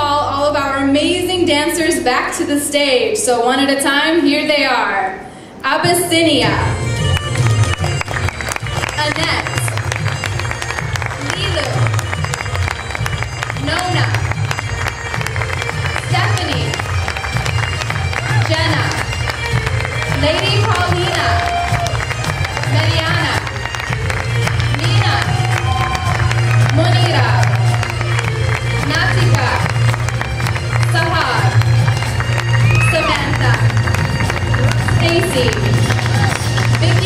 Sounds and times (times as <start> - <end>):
Bagpipes: 6.3 - 37.0.